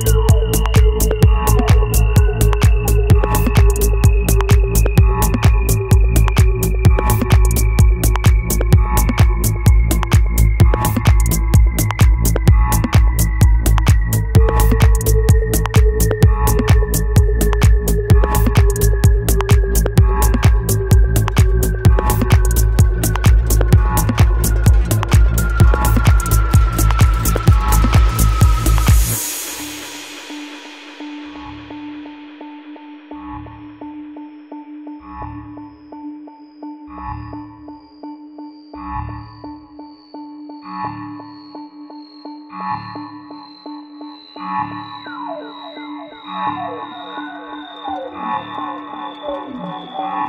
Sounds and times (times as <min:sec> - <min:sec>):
Music: 0:00.0 - 0:50.2.